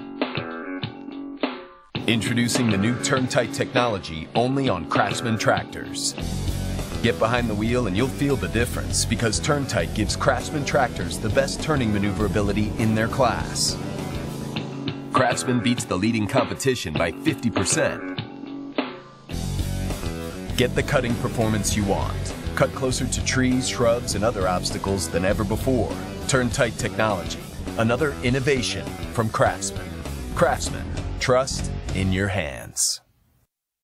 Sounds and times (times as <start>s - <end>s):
Music: 0.0s - 32.6s
Speech: 2.1s - 6.2s, 7.0s - 13.8s, 15.1s - 18.1s, 20.5s - 33.1s.